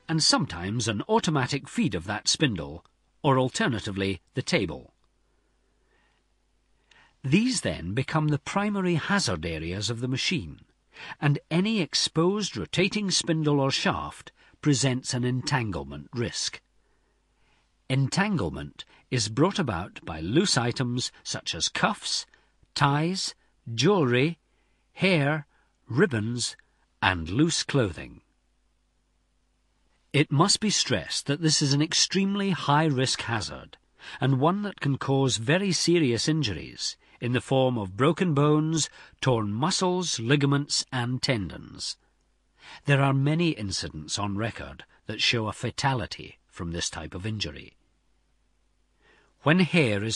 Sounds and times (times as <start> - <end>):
Speech: 0.0 - 5.0, 7.2 - 16.6, 17.9 - 24.4, 25.0 - 28.3, 30.1 - 42.0, 42.8 - 47.8, 49.4 - 50.1.